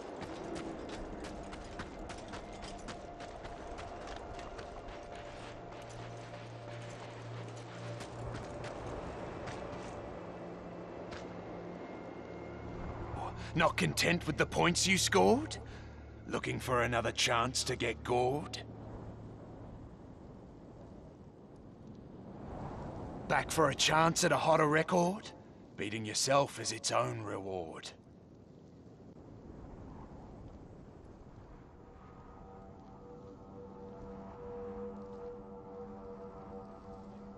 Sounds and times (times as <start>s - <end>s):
Speech: 13.2s - 15.6s, 16.3s - 18.6s, 23.3s - 28.0s.